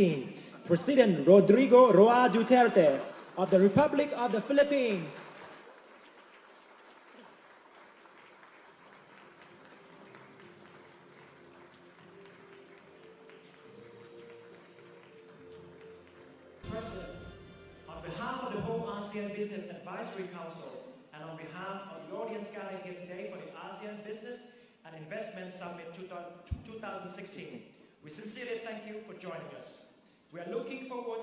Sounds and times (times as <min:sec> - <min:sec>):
Male speech, man speaking: 0:00.0 - 0:05.3, 0:16.6 - 0:17.3, 0:17.9 - 0:31.2
Narration, monologue: 0:00.0 - 0:05.5, 0:16.6 - 0:31.2.